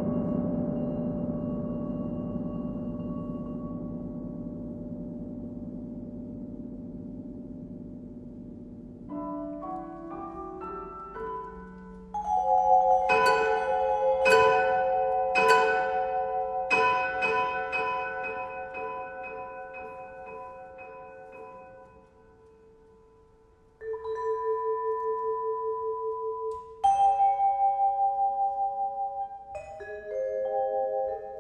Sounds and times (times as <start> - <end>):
Bell: 0.0 - 31.4
Vibraphone: 0.0 - 31.4.